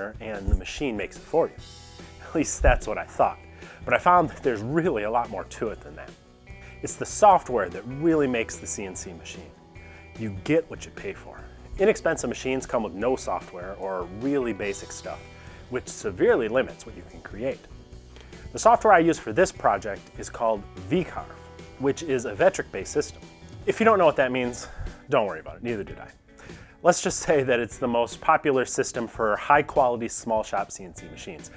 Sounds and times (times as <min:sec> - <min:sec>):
Speech: 0:00.0 - 0:01.6, 0:02.2 - 0:06.2, 0:06.8 - 0:09.5, 0:10.2 - 0:17.7, 0:18.5 - 0:26.2, 0:26.8 - 0:31.5
Music: 0:00.0 - 0:31.5.